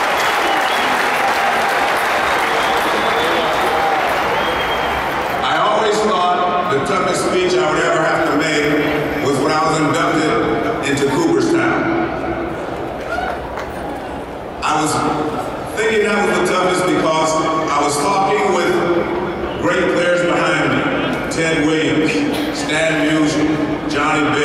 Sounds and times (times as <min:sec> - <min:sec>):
Male speech, man speaking: 0:05.4 - 0:11.9, 0:14.6 - 0:15.2, 0:15.8 - 0:19.0, 0:19.6 - 0:24.4
Narration, monologue: 0:05.4 - 0:12.4, 0:14.6 - 0:24.4.